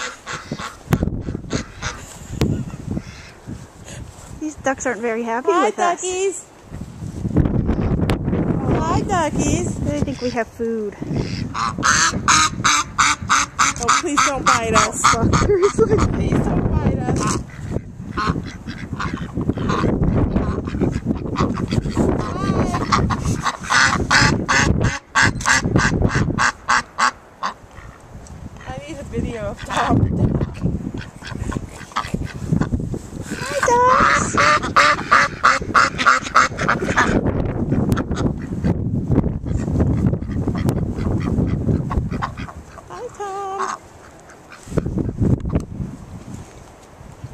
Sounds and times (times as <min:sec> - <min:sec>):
Duck: 0:00.0 - 0:03.4, 0:10.0 - 0:10.4, 0:11.1 - 0:16.2, 0:17.0 - 0:28.0, 0:29.5 - 0:38.8, 0:39.4 - 0:45.2
Honk: 0:00.0 - 0:03.4, 0:10.0 - 0:10.4, 0:11.1 - 0:16.3, 0:17.0 - 0:28.0, 0:29.5 - 0:32.7, 0:33.3 - 0:38.8, 0:39.4 - 0:45.2
Speech: 0:04.4 - 0:06.5, 0:08.6 - 0:11.0, 0:13.8 - 0:15.4, 0:16.2 - 0:17.3, 0:28.7 - 0:30.1, 0:42.9 - 0:43.7.